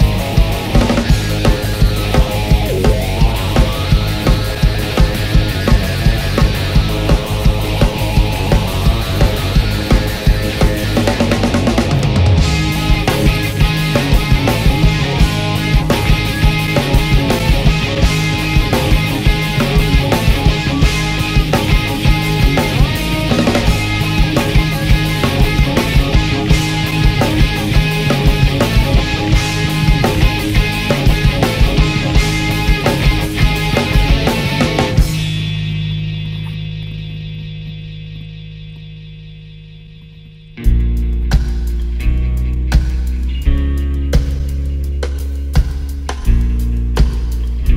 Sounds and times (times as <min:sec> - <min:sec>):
Progressive rock: 0:00.0 - 0:47.7.